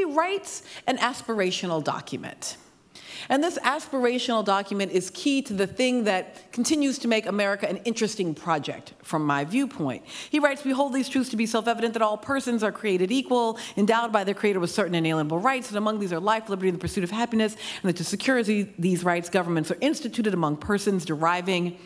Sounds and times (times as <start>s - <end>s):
Speech: 0.0s - 2.6s, 3.3s - 21.7s.